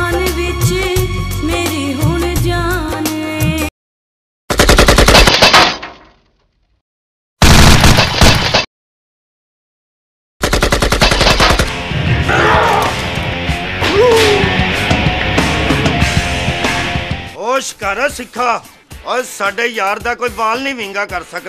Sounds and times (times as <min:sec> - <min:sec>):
Machine gun: 0:04.5 - 0:06.0, 0:07.4 - 0:08.7, 0:10.4 - 0:11.7.